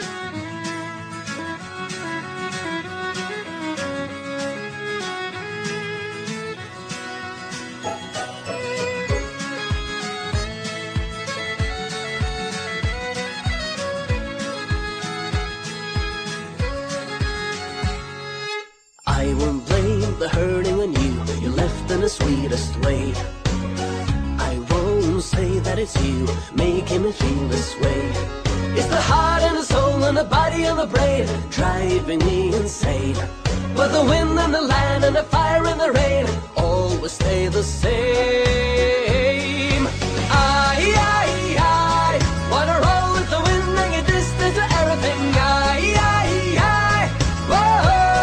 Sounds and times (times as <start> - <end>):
Music: 0.0 - 48.2.